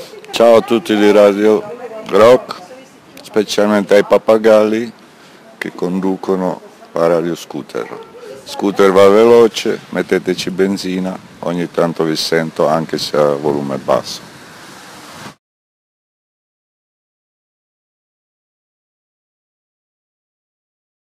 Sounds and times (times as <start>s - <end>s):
Speech: 0.0s - 4.9s, 5.5s - 14.2s.